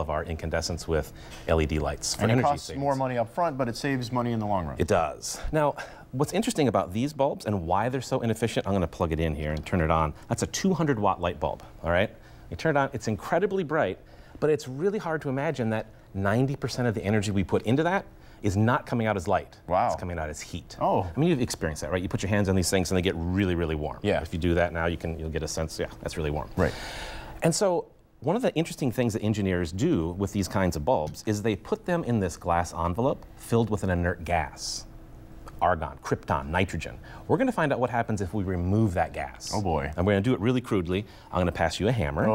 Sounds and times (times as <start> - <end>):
Speech: 0.0 - 26.7, 35.6 - 42.3.